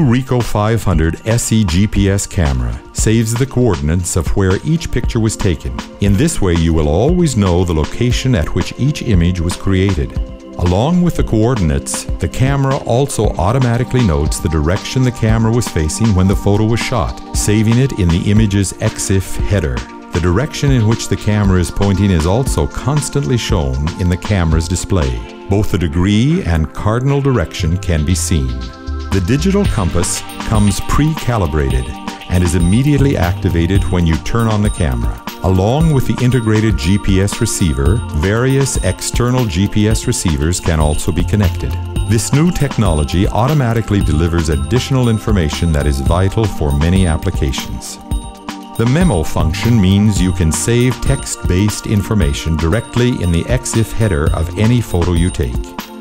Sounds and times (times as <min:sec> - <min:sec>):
Speech: 0:00.0 - 0:48.0, 0:48.8 - 0:55.7.